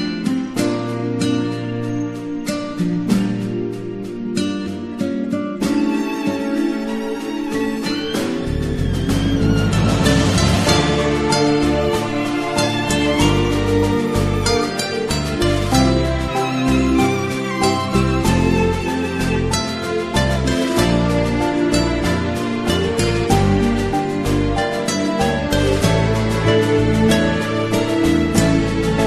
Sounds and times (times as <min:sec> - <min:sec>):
Music: 0:00.0 - 0:29.0.